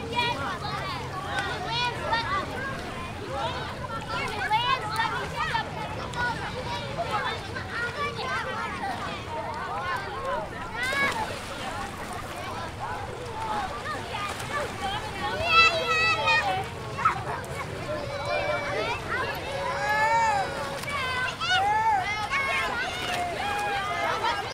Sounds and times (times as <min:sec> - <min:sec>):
Speech: 0:00.0 - 0:24.5
Water: 0:00.0 - 0:24.5.